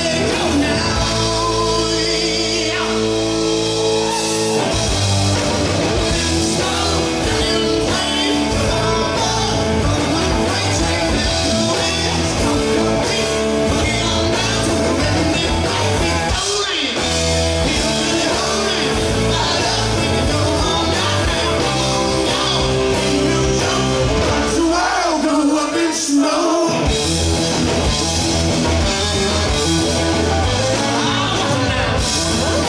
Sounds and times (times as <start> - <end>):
Rock and roll: 0.0 - 32.6
Singing: 6.1 - 26.9, 30.6 - 32.6.